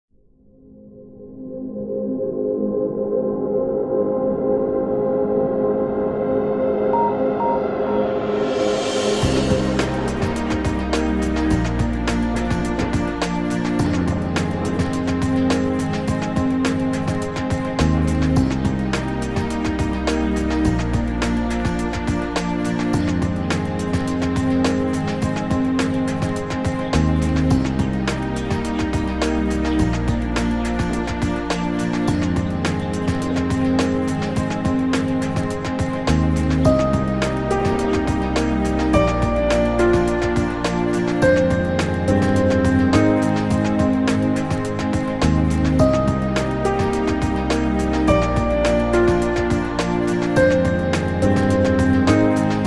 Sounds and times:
Music: 0.1 - 52.6.

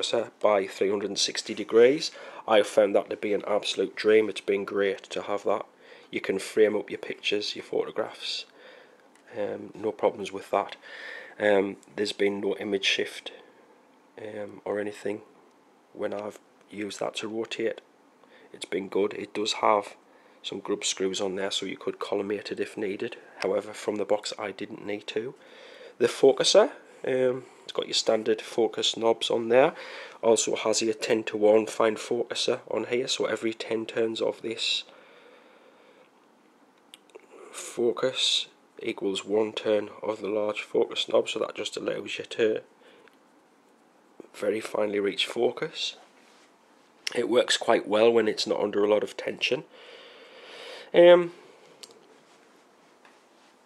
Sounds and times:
Speech: 0.0 - 8.6, 9.3 - 10.8, 11.4 - 13.5, 14.2 - 15.3, 15.9 - 17.9, 18.5 - 25.4, 26.0 - 34.9, 37.2 - 42.7, 44.2 - 46.1, 47.1 - 49.7, 50.9 - 51.4
Inside, small room: 0.0 - 53.6.

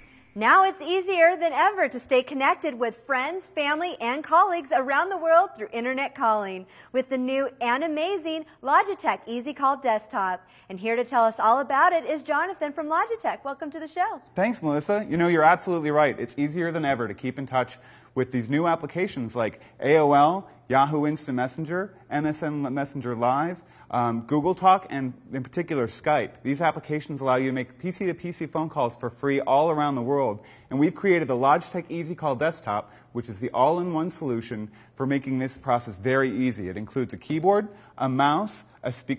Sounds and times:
Speech: 0.4 - 39.1.

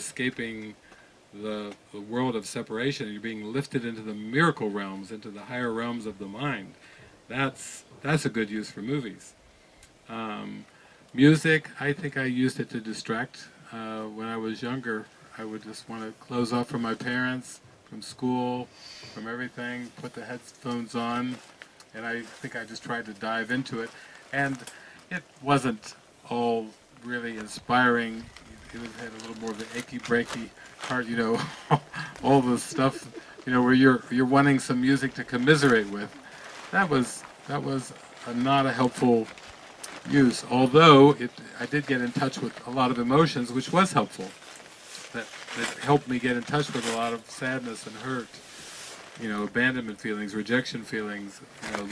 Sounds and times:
Speech: 0.0 - 9.4, 10.1 - 44.4, 45.1 - 48.4, 49.2 - 51.9.

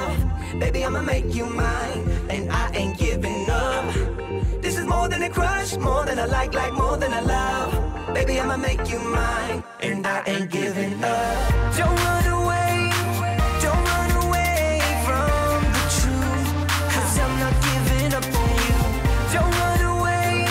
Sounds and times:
Music: 0.0 - 9.8, 10.9 - 20.5.

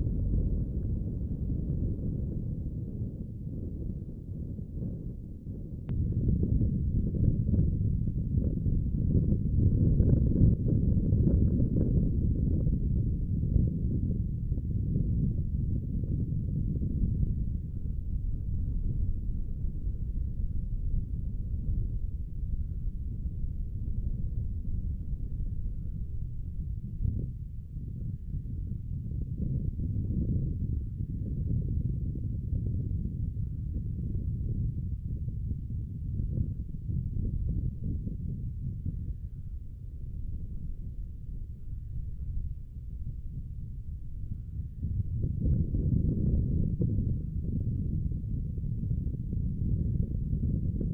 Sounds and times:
Outside, rural or natural: 0.0 - 50.9.

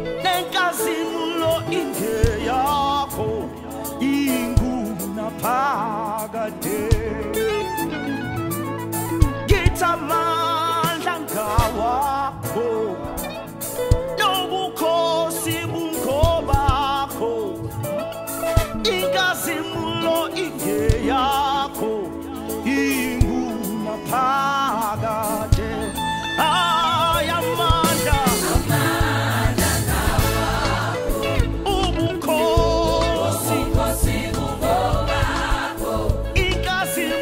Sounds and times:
Gospel music: 0.0 - 37.2.

